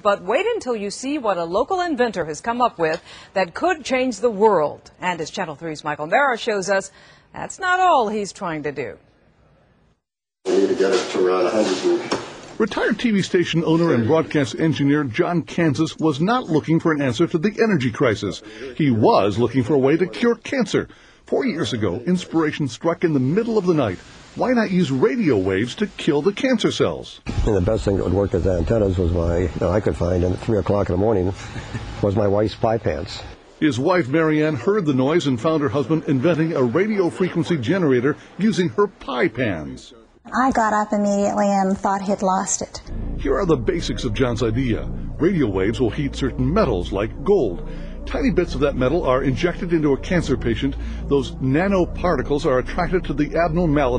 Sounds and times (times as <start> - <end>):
Speech: 10.5 - 31.4, 32.0 - 53.9.